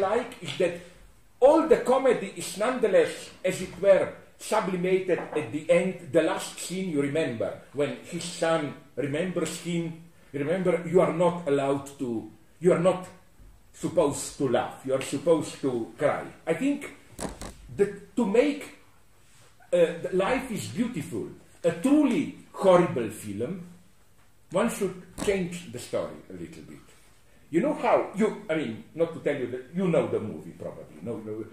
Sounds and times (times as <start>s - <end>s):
Speech: 0.0s - 17.0s, 17.7s - 18.8s, 19.7s - 23.8s, 24.5s - 26.9s, 27.5s - 31.5s.